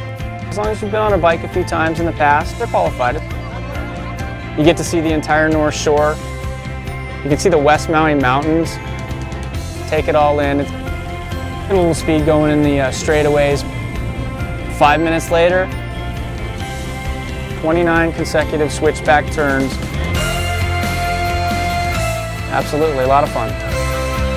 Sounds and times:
Music: 0:00.0 - 0:24.3
Speech: 0:00.5 - 0:03.2, 0:04.6 - 0:06.2, 0:07.2 - 0:08.8, 0:09.9 - 0:10.7, 0:11.7 - 0:13.6, 0:14.8 - 0:15.7, 0:17.6 - 0:19.8, 0:22.5 - 0:23.5.

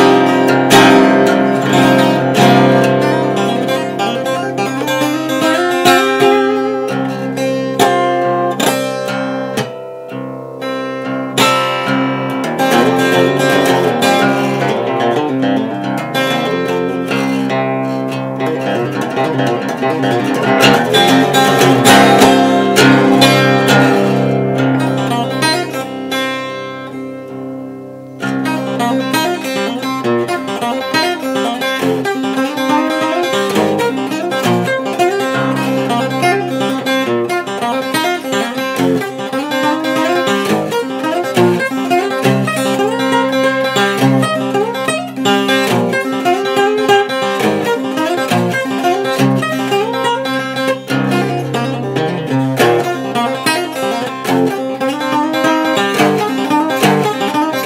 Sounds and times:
Acoustic guitar: 0:00.0 - 0:57.6
Strum: 0:00.0 - 0:57.6.

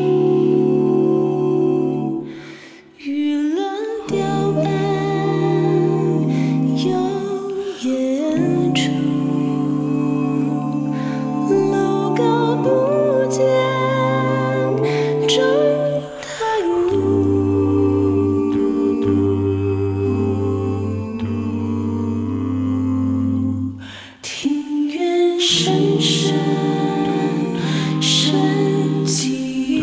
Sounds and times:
Music: 0:00.0 - 0:29.8.

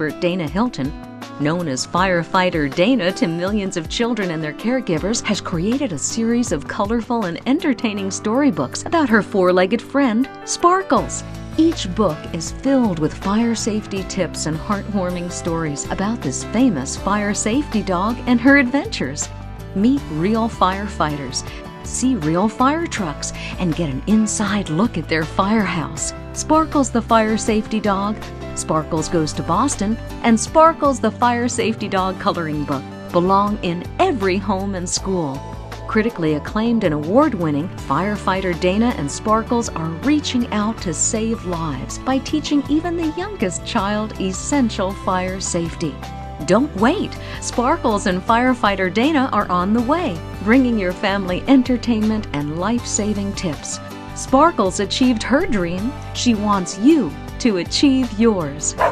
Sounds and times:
Speech: 0:00.0 - 0:58.8
Music: 0:00.0 - 0:58.9.

